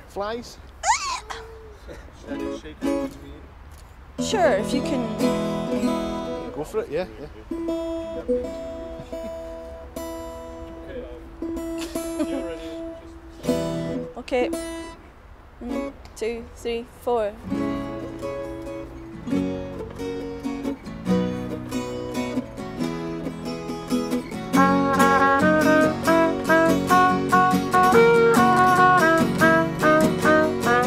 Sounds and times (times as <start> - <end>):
Music: 4.2 - 6.6, 7.6 - 14.9, 17.5 - 30.8.